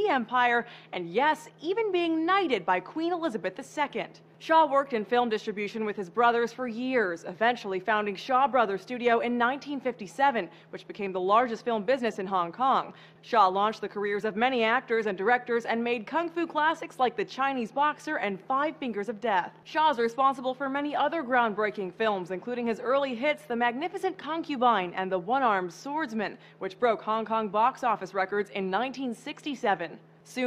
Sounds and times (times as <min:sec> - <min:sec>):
Speech: 0:00.0 - 0:30.4.